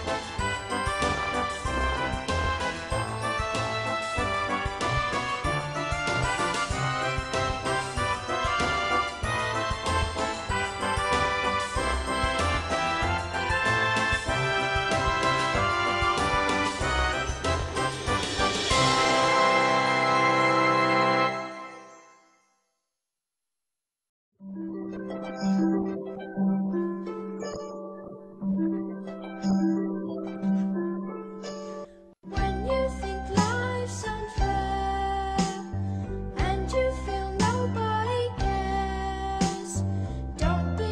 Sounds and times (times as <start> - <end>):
Soundtrack music: 0.0 - 22.1.